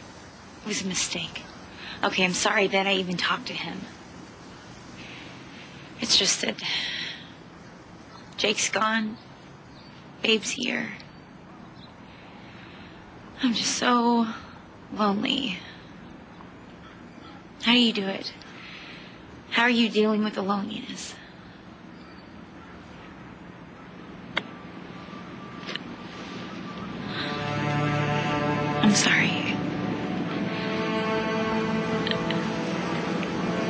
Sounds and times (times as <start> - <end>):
Outside, rural or natural: 0.0 - 33.7
Speech: 0.6 - 3.9, 6.0 - 6.7, 8.4 - 9.2, 10.2 - 11.0, 13.4 - 14.4, 15.0 - 15.7, 17.6 - 18.4, 19.5 - 21.2, 28.8 - 29.6.